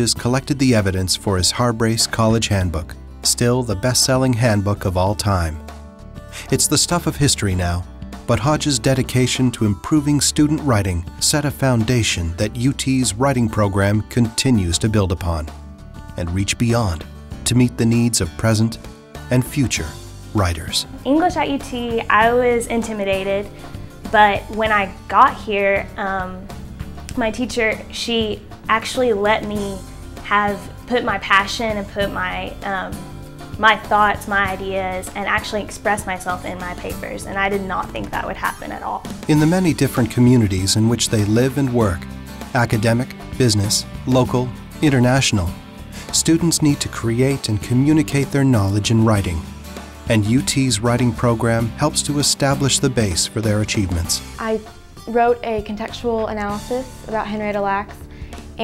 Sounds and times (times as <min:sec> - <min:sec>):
Speech: 0:00.0 - 0:05.6, 0:06.4 - 0:15.5, 0:16.2 - 0:23.5, 0:33.6 - 0:42.0, 0:42.6 - 0:49.4, 0:50.1 - 0:58.0
Music: 0:00.0 - 0:58.6.